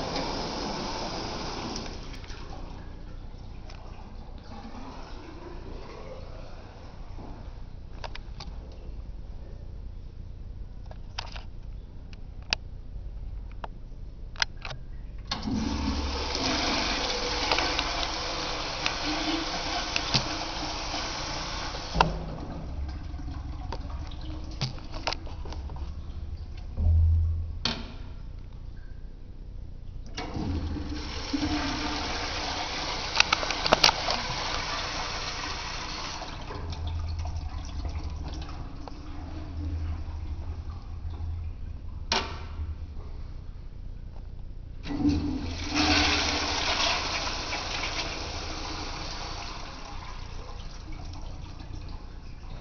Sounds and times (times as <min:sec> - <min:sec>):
Toilet flush: 0:00.0 - 0:02.8, 0:03.8 - 0:07.5, 0:15.3 - 0:25.9, 0:30.2 - 0:41.4, 0:44.8 - 0:52.6.